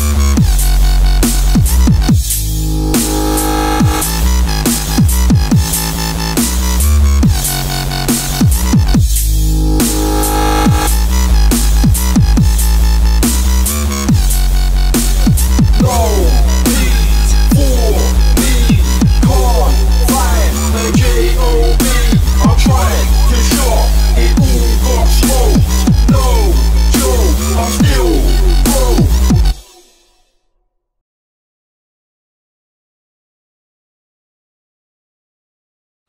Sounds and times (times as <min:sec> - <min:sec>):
Drum and bass: 0:00.0 - 0:30.2.